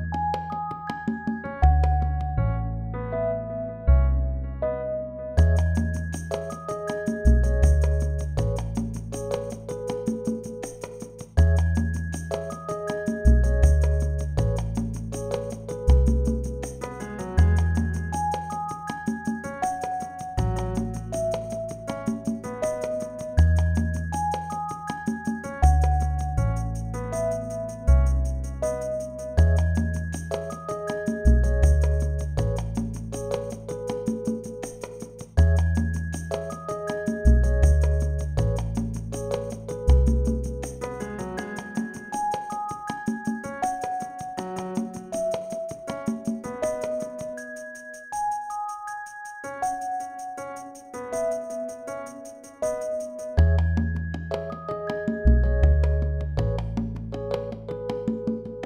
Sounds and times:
Music: 0.0s - 58.6s.

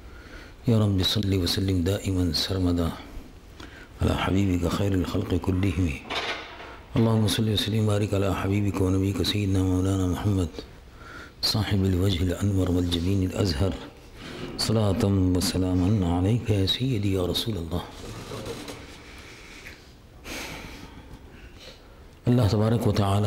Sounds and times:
Male speech, man speaking: 0.7s - 3.1s, 4.0s - 6.1s, 7.0s - 10.7s, 11.4s - 14.0s, 14.6s - 18.8s, 22.2s - 23.2s.

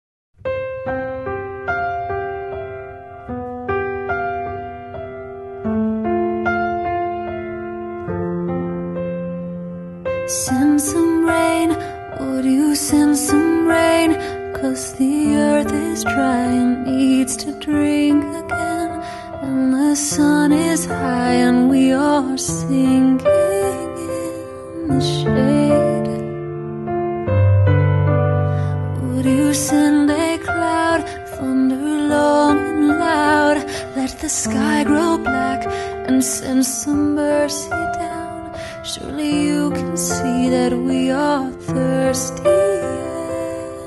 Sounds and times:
Electric piano: 0.4s - 43.8s.

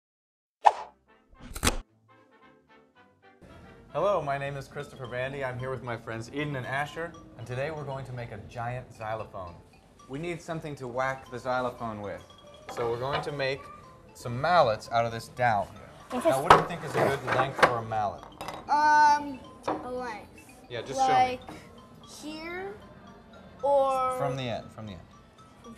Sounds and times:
Marimba, xylophone: 4.5s - 25.7s.

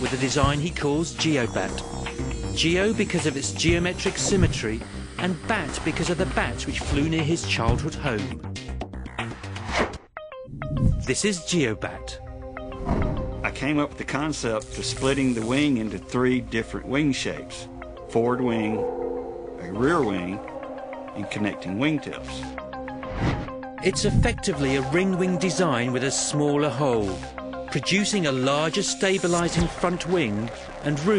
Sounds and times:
Speech: 0.0s - 1.8s, 2.6s - 8.4s, 11.1s - 12.2s, 13.5s - 18.8s, 19.6s - 20.4s, 21.2s - 22.5s, 23.8s - 31.1s
Music: 0.0s - 31.1s.

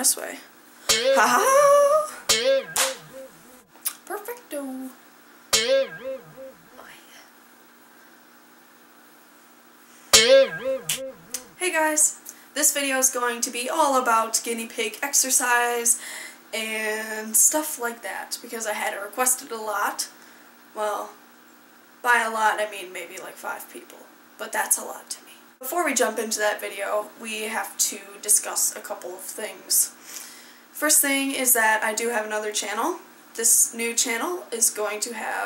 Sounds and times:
Speech: 0.0s - 0.5s, 3.9s - 5.0s, 11.6s - 16.0s, 16.6s - 20.2s, 20.8s - 21.2s, 22.0s - 30.0s, 30.8s - 35.4s.

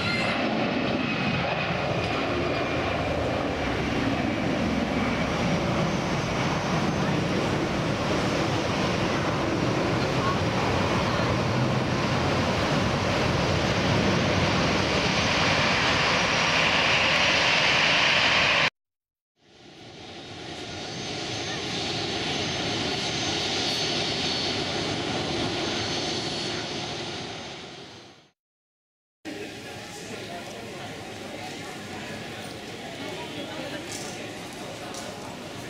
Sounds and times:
Aircraft engine: 0.0s - 18.8s, 19.4s - 28.4s, 29.3s - 35.7s
Fixed-wing aircraft, airplane: 0.0s - 18.8s, 19.4s - 28.4s, 29.3s - 35.7s.

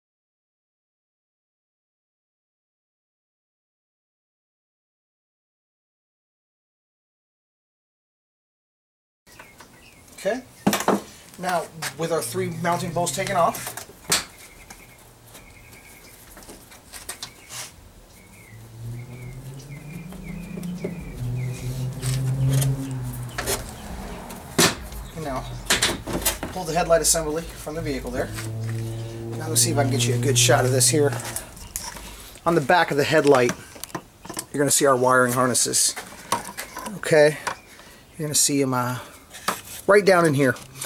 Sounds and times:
Outside, rural or natural: 9.3s - 40.8s
Speech: 10.2s - 10.5s, 11.4s - 13.7s, 25.2s - 25.6s, 26.5s - 28.4s, 29.4s - 31.3s, 32.5s - 33.6s, 34.5s - 36.0s, 36.8s - 37.5s, 38.2s - 39.1s, 39.9s - 40.6s
Car: 11.4s - 14.0s, 18.1s - 33.1s, 40.4s - 40.8s.

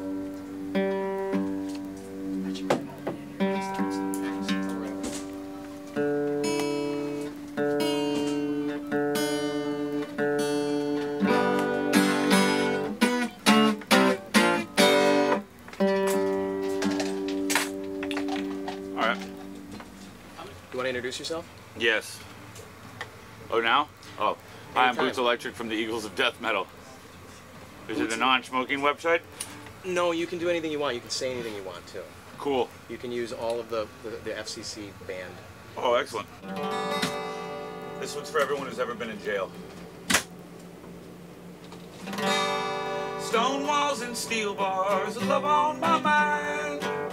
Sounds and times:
Strum: 0.0s - 20.2s, 36.4s - 47.1s.

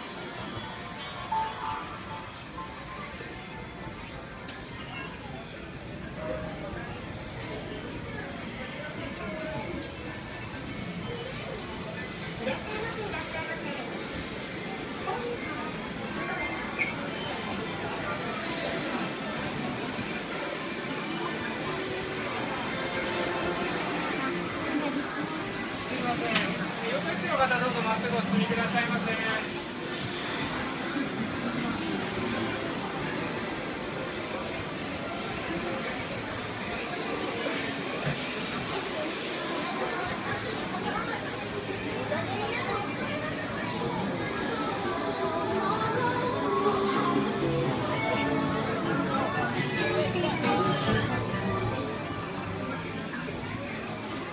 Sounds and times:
Speech: 2.6s - 29.9s, 30.6s - 54.3s.

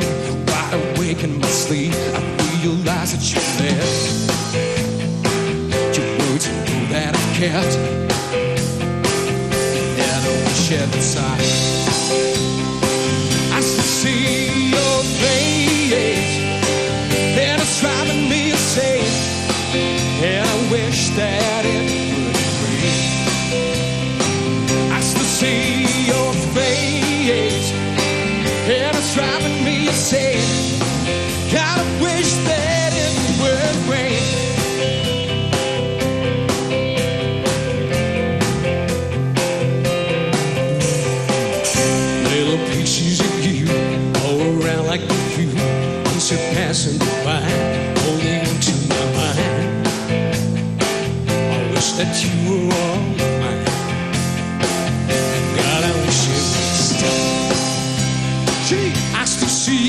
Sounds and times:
Music: 0.0s - 59.8s.

